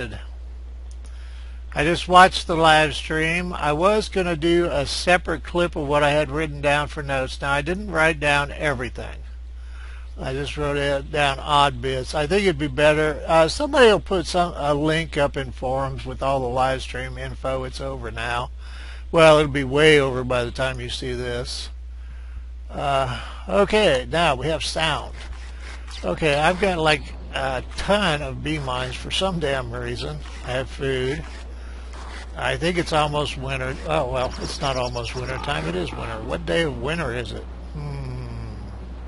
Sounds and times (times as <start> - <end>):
Speech: 0.0 - 0.3, 1.8 - 9.3, 10.2 - 21.8, 22.7 - 25.2, 25.9 - 31.4, 32.1 - 38.8.